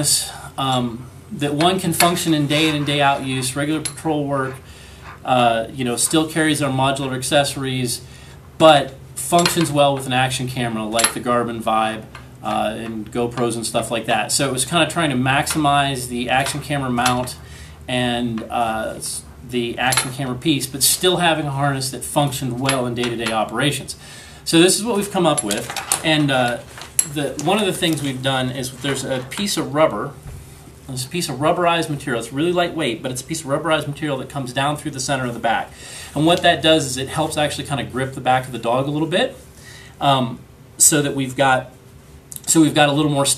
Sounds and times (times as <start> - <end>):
Speech: 0.0 - 8.0, 8.6 - 30.2, 30.9 - 39.4, 40.0 - 43.3.